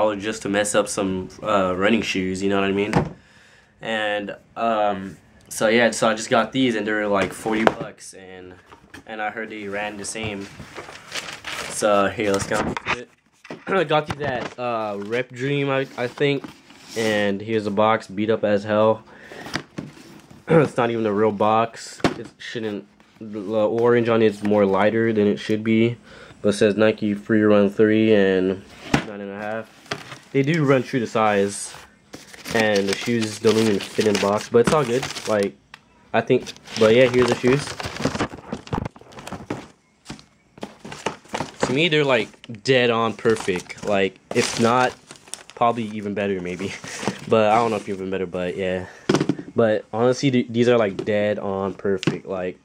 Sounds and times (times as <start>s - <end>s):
Speech: 0.0s - 3.0s, 3.8s - 10.5s, 11.8s - 16.4s, 17.0s - 19.0s, 20.5s - 29.7s, 30.4s - 31.8s, 32.6s - 37.7s, 41.6s - 45.0s, 45.6s - 48.9s, 49.6s - 52.6s
Inside, small room: 0.0s - 52.6s.